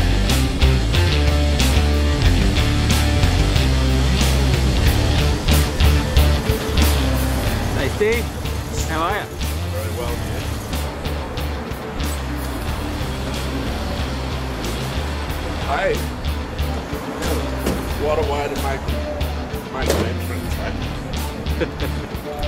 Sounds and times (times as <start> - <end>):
Music: 0.0 - 22.4
Speech: 7.8 - 10.4, 15.6 - 16.0, 17.9 - 21.0.